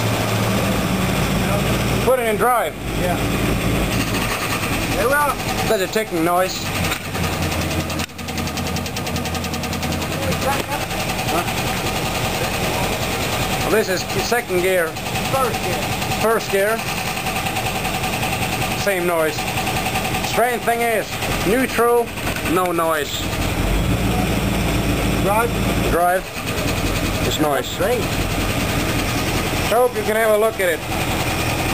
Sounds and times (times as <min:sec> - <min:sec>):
Car: 0:00.0 - 0:31.7
Light engine (high frequency): 0:00.0 - 0:31.7
Speech: 0:20.3 - 0:23.2, 0:25.2 - 0:26.3, 0:27.3 - 0:28.1, 0:29.7 - 0:30.8.